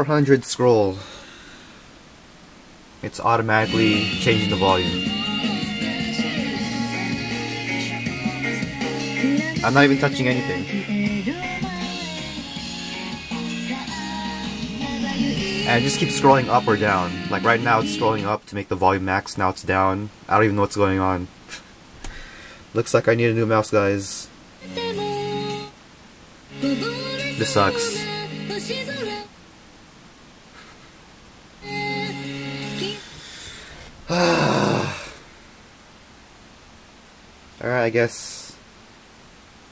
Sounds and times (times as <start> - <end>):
Speech: 0.0 - 1.1, 3.0 - 5.0, 9.6 - 10.6, 15.7 - 21.3, 22.8 - 24.3, 27.4 - 28.0, 37.6 - 38.6
Music: 3.6 - 18.3, 24.6 - 25.7, 26.5 - 29.3, 31.6 - 33.1.